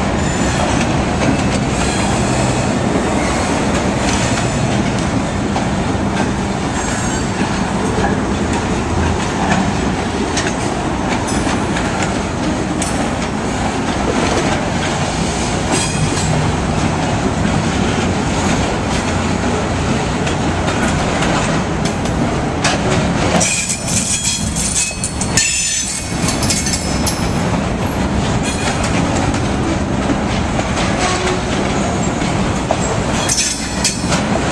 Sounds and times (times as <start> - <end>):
Outside, urban or manmade: 0.0 - 34.5
Railroad car, train wagon: 0.0 - 34.5
Train: 0.0 - 34.5.